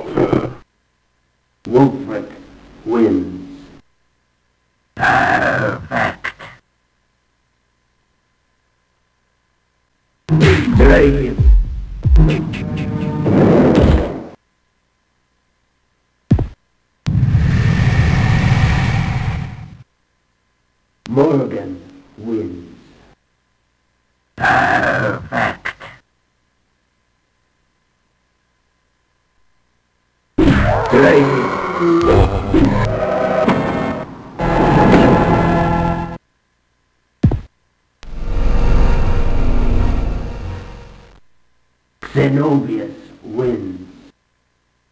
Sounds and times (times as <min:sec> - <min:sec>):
Sound effect: 0:10.3 - 0:14.4, 0:17.1 - 0:19.8, 0:30.4 - 0:36.2, 0:38.0 - 0:41.2.